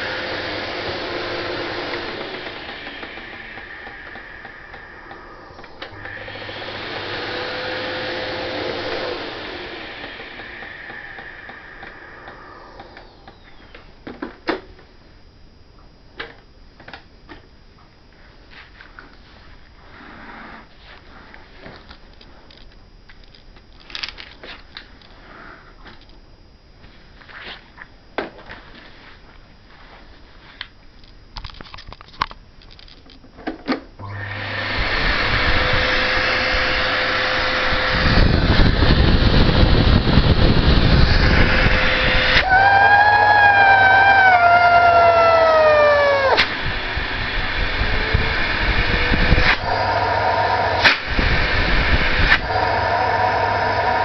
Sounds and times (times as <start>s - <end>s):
Vacuum cleaner: 0.0s - 13.6s, 34.0s - 54.0s.